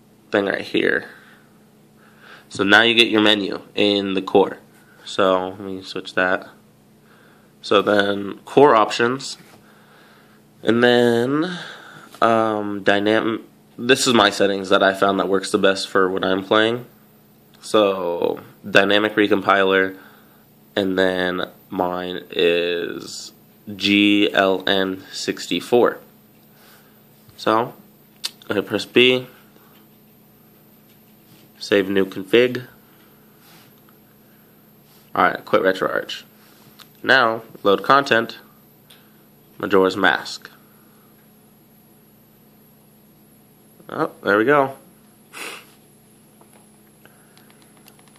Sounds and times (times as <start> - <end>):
Inside, small room: 0.0 - 48.1
Speech: 0.3 - 1.2, 2.5 - 6.6, 7.6 - 9.5, 10.6 - 16.9, 17.6 - 20.0, 20.8 - 26.1, 27.4 - 27.8, 28.4 - 29.4, 31.6 - 32.8, 35.1 - 36.3, 37.0 - 38.5, 39.6 - 40.6, 43.8 - 44.9.